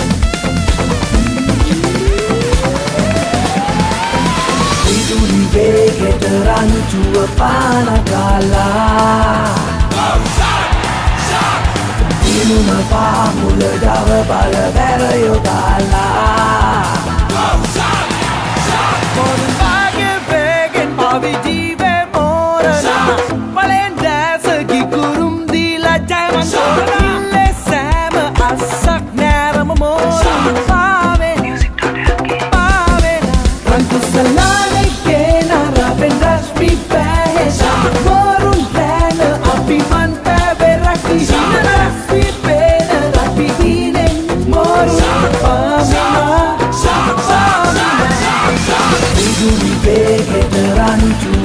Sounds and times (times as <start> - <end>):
Music: 0.0 - 51.4.